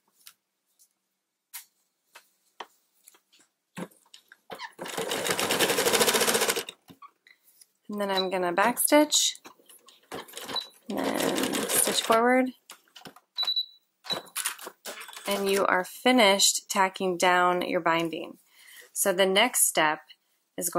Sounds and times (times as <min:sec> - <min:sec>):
Sewing machine: 0:04.8 - 0:06.8, 0:10.1 - 0:12.2
Speech: 0:07.9 - 0:09.4, 0:10.9 - 0:12.6, 0:15.3 - 0:18.4, 0:19.0 - 0:20.7.